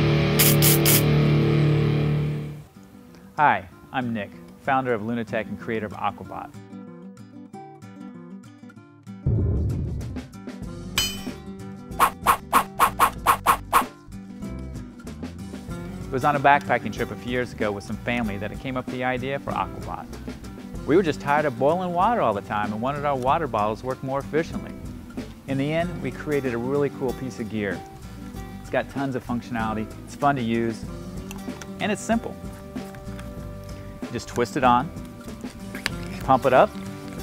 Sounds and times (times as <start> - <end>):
Music: 0.0 - 37.2
Speech: 3.4 - 6.5, 16.1 - 20.0, 20.9 - 24.7, 25.5 - 27.8, 28.7 - 30.8, 31.8 - 32.4, 34.1 - 34.9, 36.2 - 36.7.